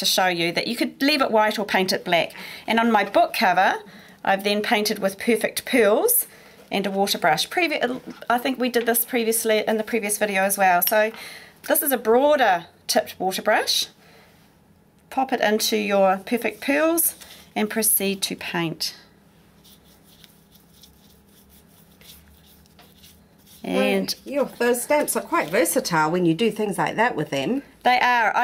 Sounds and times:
Inside, small room: 0.0 - 28.4.

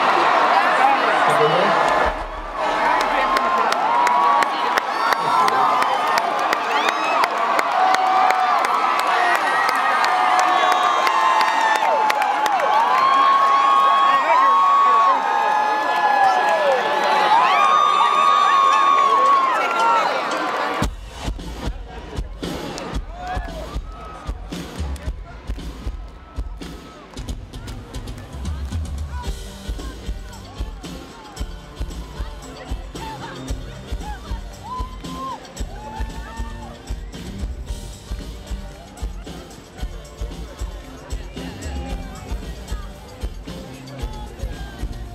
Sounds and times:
Music: 20.4 - 45.1.

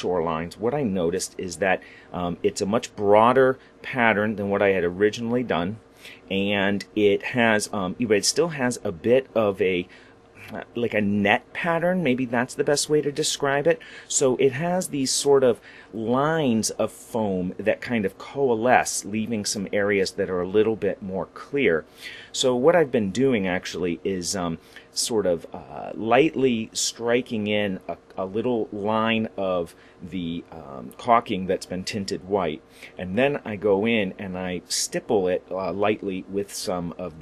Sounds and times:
Speech: 0.0 - 37.2.

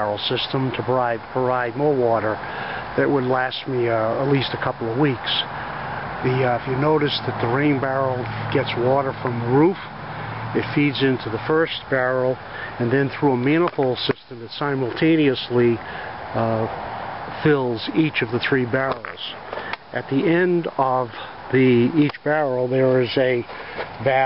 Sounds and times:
Speech: 0.0 - 2.4, 3.0 - 5.5, 6.2 - 9.9, 10.6 - 24.2.

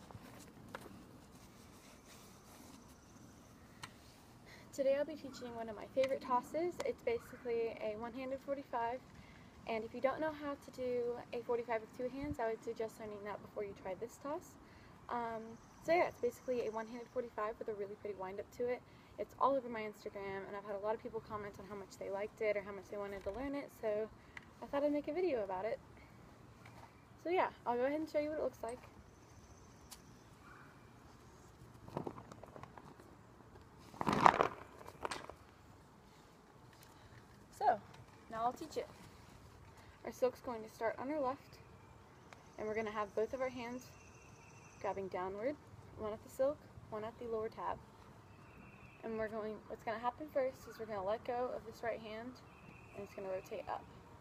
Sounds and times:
Speech: 4.7 - 9.0, 9.7 - 25.8, 27.2 - 28.9, 37.6 - 39.0, 40.0 - 41.6, 42.6 - 43.9, 44.8 - 47.8, 49.0 - 53.9.

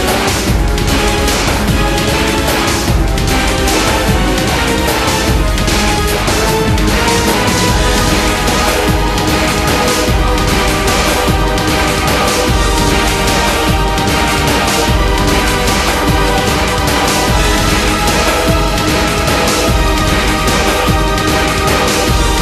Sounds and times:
Music: 0.0 - 22.4.

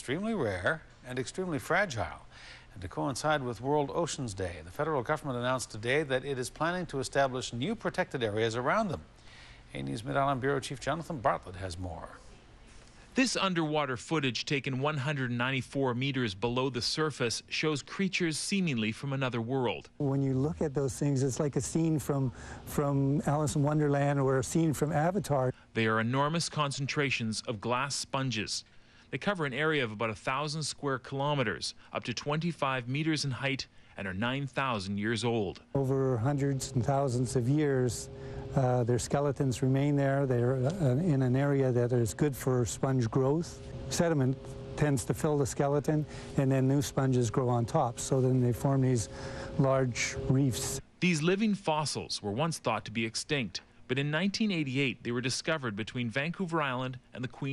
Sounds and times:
Speech: 0.0 - 9.1, 9.7 - 12.2, 13.2 - 57.5.

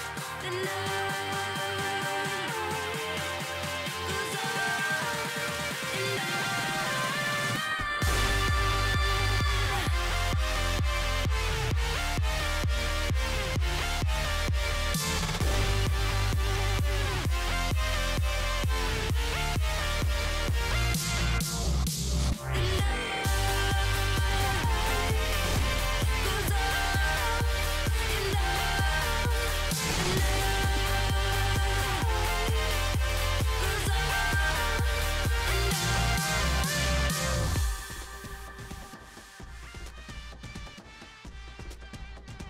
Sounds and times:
Music: 0.0 - 42.5.

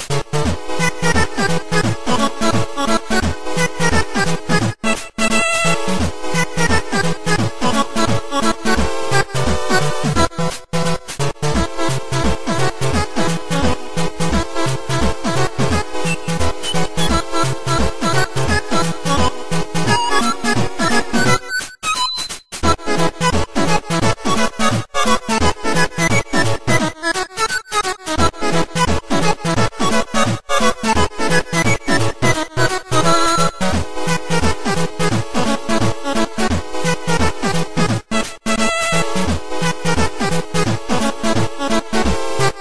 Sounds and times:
Happy music: 0.0 - 42.6.

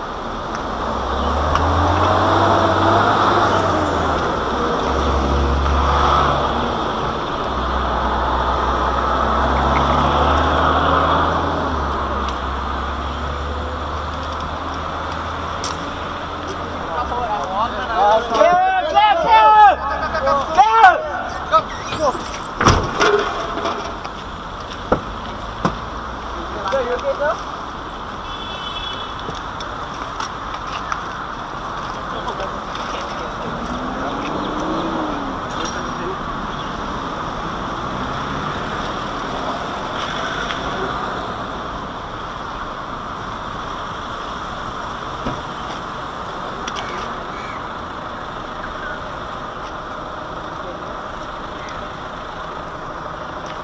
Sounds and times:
Car: 0.0 - 53.6.

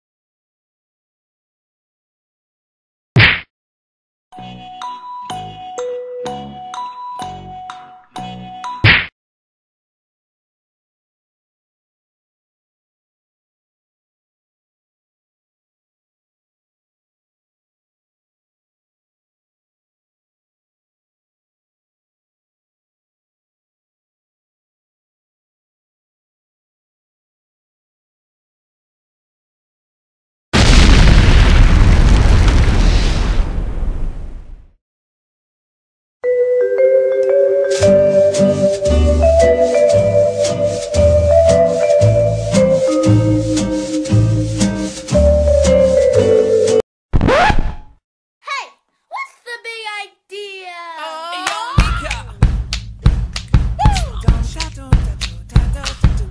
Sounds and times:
Vibraphone: 4.4 - 8.8, 36.2 - 43.4.

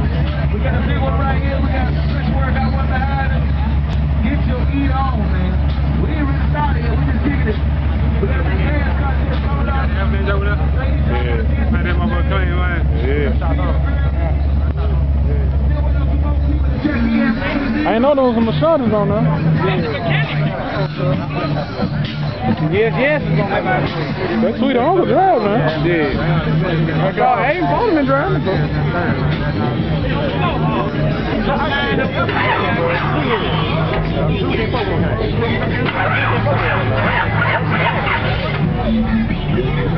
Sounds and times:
Music: 0.0 - 39.9
Speech: 0.0 - 39.9.

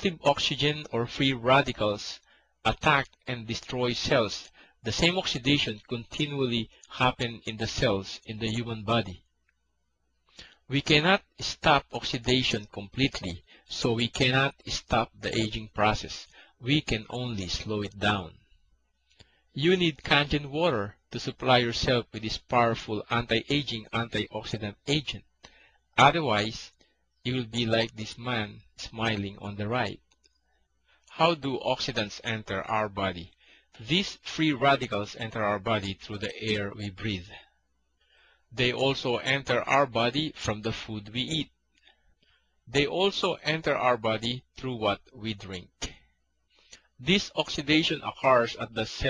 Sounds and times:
Speech: 0.0 - 9.2, 10.7 - 18.4, 19.6 - 25.2, 26.0 - 30.0, 31.1 - 37.5, 38.6 - 41.5, 42.7 - 46.0, 47.0 - 49.0.

